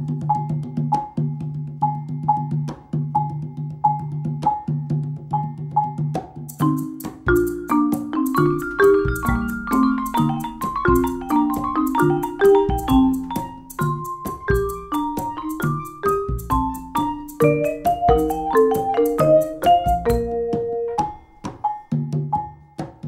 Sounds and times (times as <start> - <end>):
Drum: 0.0 - 23.0.